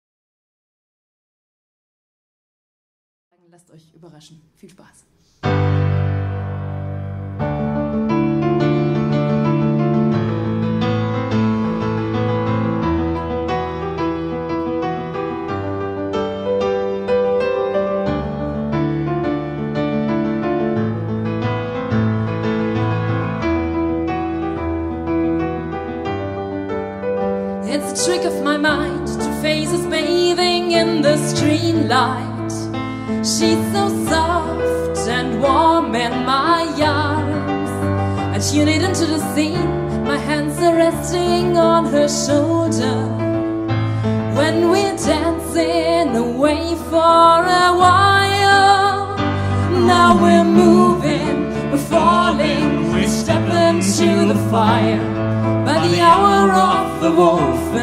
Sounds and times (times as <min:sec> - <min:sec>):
Music: 0:03.3 - 0:57.8.